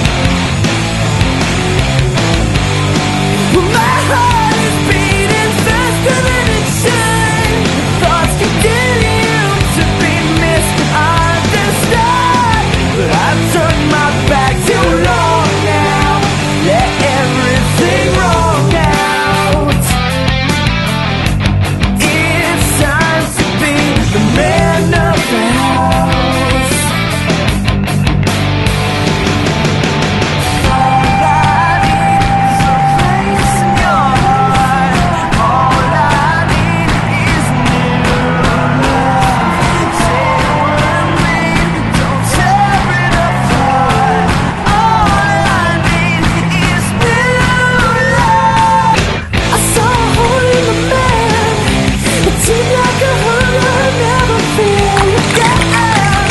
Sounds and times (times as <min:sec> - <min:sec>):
Music: 0:00.0 - 0:56.3.